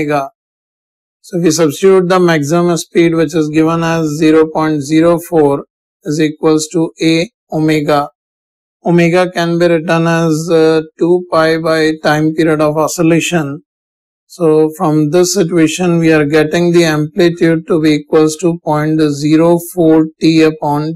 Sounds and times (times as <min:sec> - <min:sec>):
Speech: 0:00.0 - 0:00.3, 0:01.2 - 0:08.2, 0:08.9 - 0:13.6, 0:14.3 - 0:20.9.